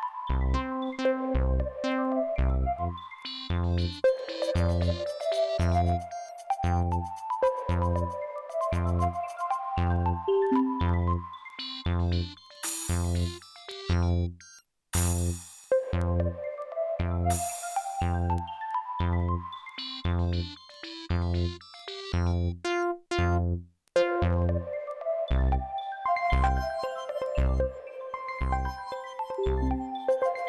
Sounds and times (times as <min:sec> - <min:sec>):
Music: 0:00.0 - 0:30.4.